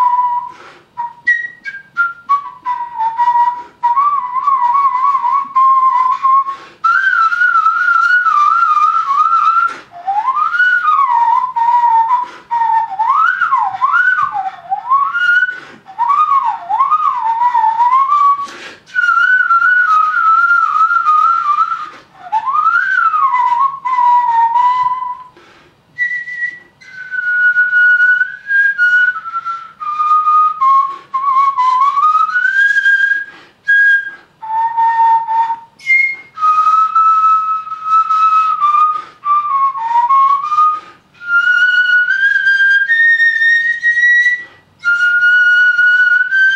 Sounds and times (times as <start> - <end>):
Flute: 0.0 - 46.5.